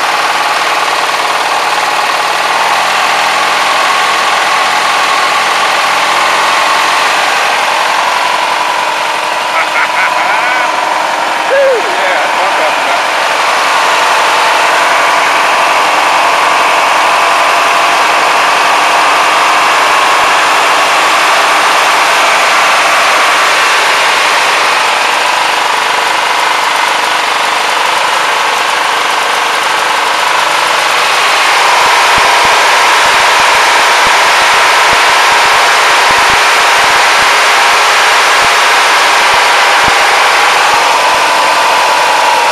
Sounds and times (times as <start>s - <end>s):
Lawn mower: 0.0s - 42.5s.